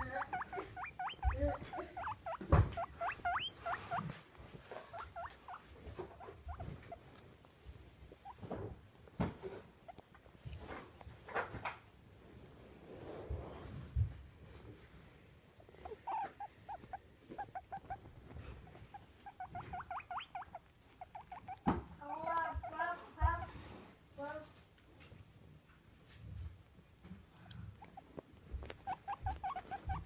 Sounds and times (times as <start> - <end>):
Speech: 0.0 - 0.4, 1.2 - 2.0, 22.0 - 23.6, 24.2 - 24.6.